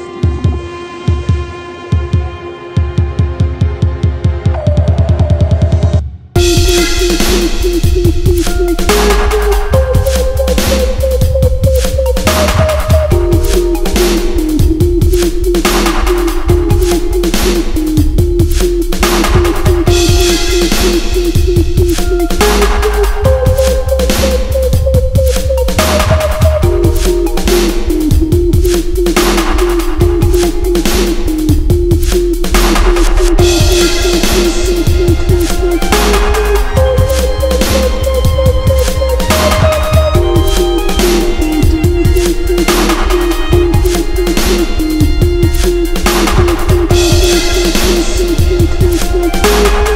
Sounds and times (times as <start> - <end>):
Dubstep: 4.5 - 49.9.